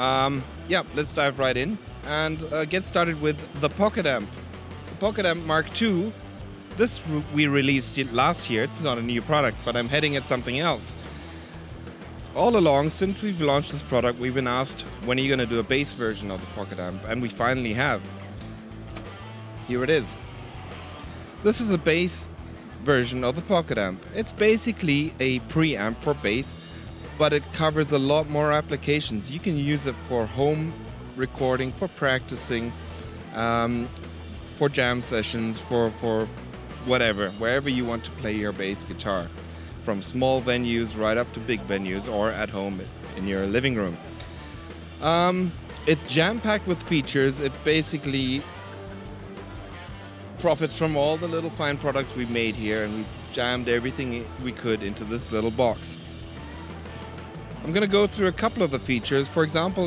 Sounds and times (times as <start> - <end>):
Speech: 0.0 - 4.3, 4.9 - 6.2, 6.8 - 11.0, 12.3 - 18.1, 19.6 - 20.2, 21.4 - 33.9, 34.5 - 44.1, 45.0 - 48.5, 50.4 - 56.0, 57.6 - 59.8
Music: 0.0 - 59.8.